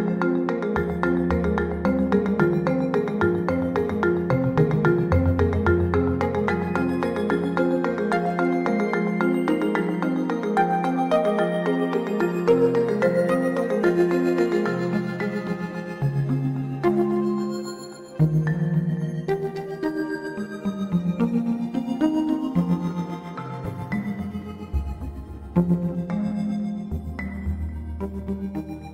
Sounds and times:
Music: 0:00.0 - 0:28.9.

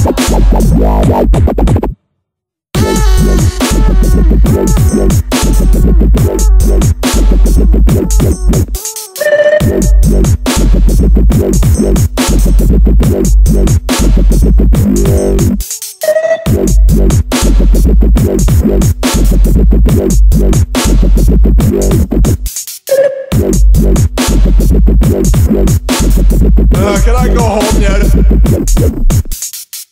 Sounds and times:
Dubstep: 0:00.0 - 0:01.9, 0:02.8 - 0:29.9.

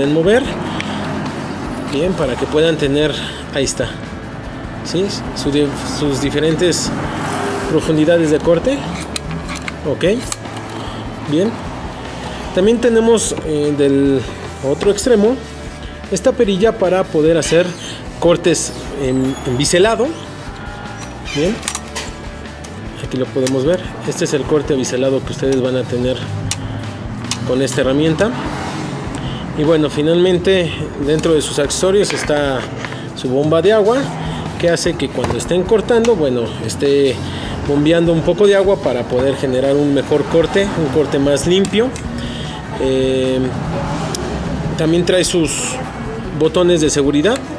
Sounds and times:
Speech: 0:00.0 - 0:00.6, 0:01.9 - 0:04.0, 0:04.9 - 0:06.9, 0:07.7 - 0:08.9, 0:09.8 - 0:10.3, 0:11.3 - 0:11.6, 0:12.6 - 0:15.4, 0:16.1 - 0:20.2, 0:23.1 - 0:26.2, 0:27.5 - 0:28.4, 0:29.6 - 0:42.0, 0:42.8 - 0:43.6, 0:44.8 - 0:47.5
Music: 0:00.0 - 0:47.5.

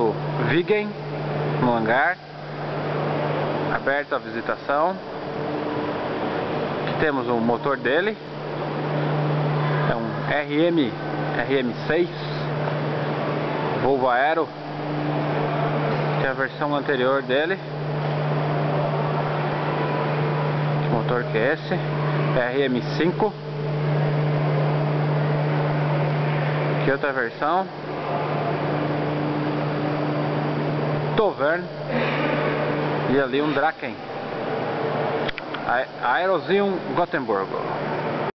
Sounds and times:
Speech: 0:00.0 - 0:01.0, 0:01.6 - 0:02.2, 0:03.7 - 0:05.0, 0:06.9 - 0:08.2, 0:09.9 - 0:12.5, 0:13.8 - 0:14.5, 0:16.2 - 0:17.7, 0:20.8 - 0:23.4, 0:26.8 - 0:27.7, 0:31.2 - 0:31.7, 0:33.1 - 0:34.0, 0:35.6 - 0:37.7.

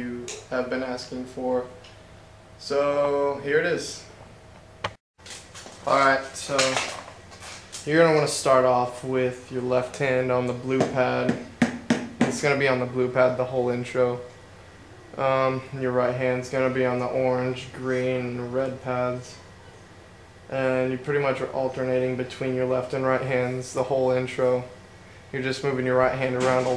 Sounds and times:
Speech: 0:00.0 - 0:01.8, 0:02.6 - 0:04.1, 0:05.9 - 0:07.0, 0:07.8 - 0:11.4, 0:12.2 - 0:14.3, 0:15.2 - 0:19.5, 0:20.5 - 0:24.8, 0:25.4 - 0:26.7
Inside, small room: 0:00.0 - 0:26.7
Drum: 0:10.7 - 0:12.7.

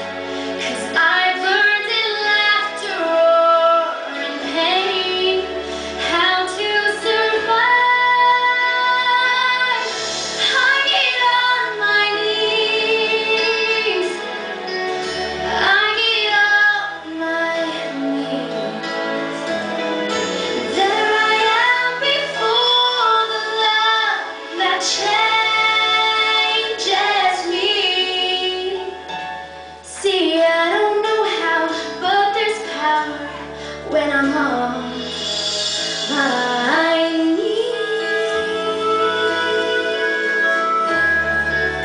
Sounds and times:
Music: 0:00.0 - 0:41.8
Female singing: 0:00.6 - 0:14.2, 0:15.5 - 0:18.9, 0:20.6 - 0:29.0, 0:29.9 - 0:35.1, 0:36.1 - 0:41.0.

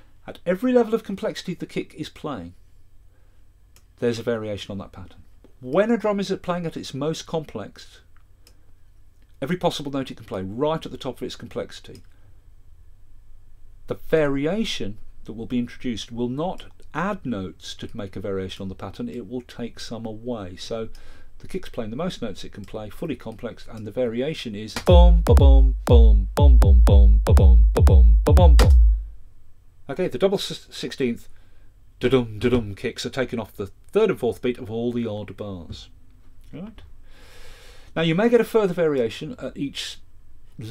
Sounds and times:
Speech: 0:00.3 - 0:02.6, 0:04.0 - 0:08.1, 0:09.4 - 0:12.1, 0:13.9 - 0:26.2, 0:29.9 - 0:31.3, 0:32.0 - 0:36.9, 0:38.0 - 0:40.7
Music: 0:24.9 - 0:29.1.

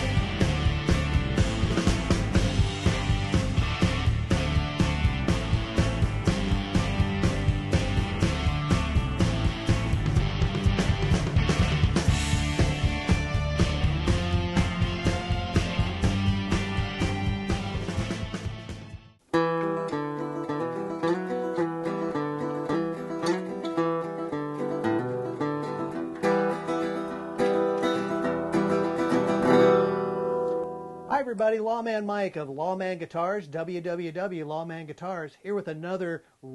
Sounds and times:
Bass guitar: 0:00.0 - 0:31.1
Strum: 0:00.0 - 0:31.1.

